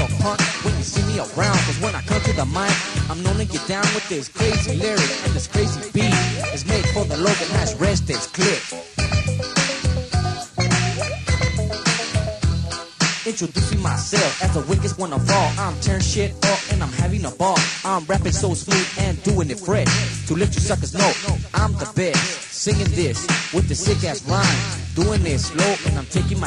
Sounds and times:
Rapping: 0.0 - 8.8, 13.2 - 26.4
Disco: 0.0 - 26.4.

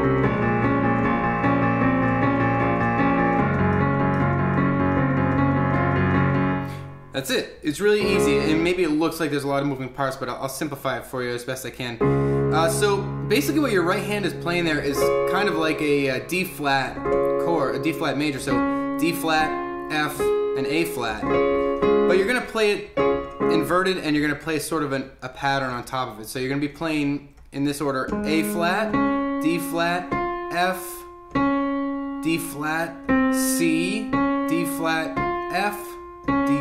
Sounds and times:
Music: 0.0 - 7.2, 8.0 - 9.6, 12.0 - 24.3, 28.0 - 36.6
Speech: 7.2 - 21.3, 22.1 - 31.1, 32.2 - 36.6.

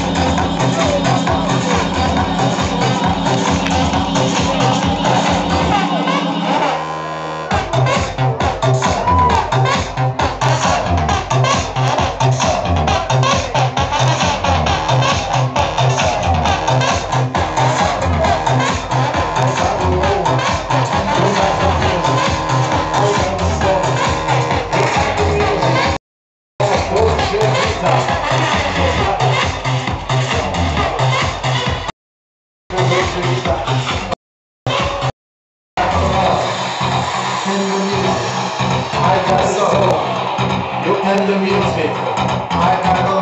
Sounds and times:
House music: 0.0 - 26.0, 26.6 - 31.9, 32.7 - 35.1, 35.8 - 43.2.

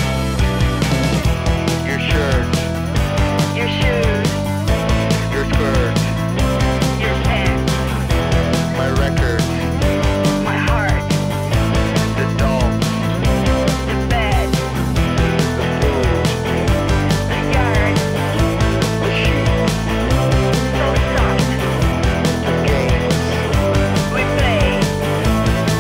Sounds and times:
Grunge: 0.0 - 25.8.

